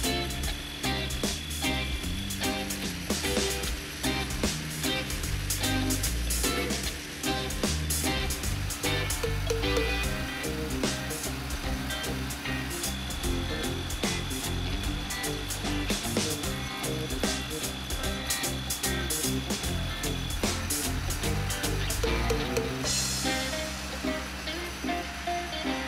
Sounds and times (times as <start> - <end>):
Music: 0.0 - 25.8.